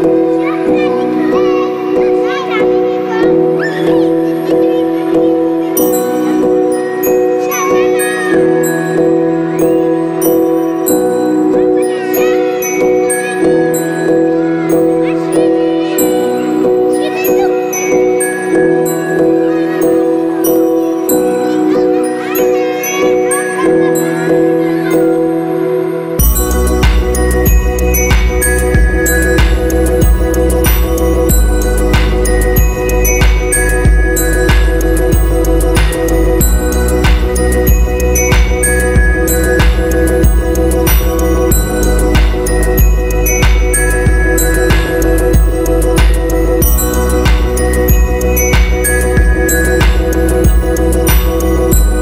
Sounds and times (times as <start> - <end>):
Speech: 0.0 - 8.7, 11.5 - 26.7
Music: 0.0 - 52.0.